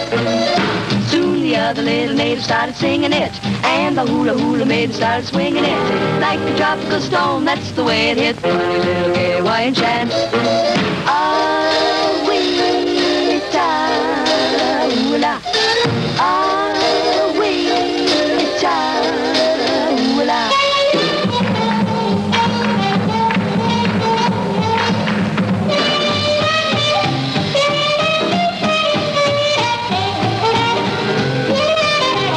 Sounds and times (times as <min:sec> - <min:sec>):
Music: 0:00.0 - 0:32.3.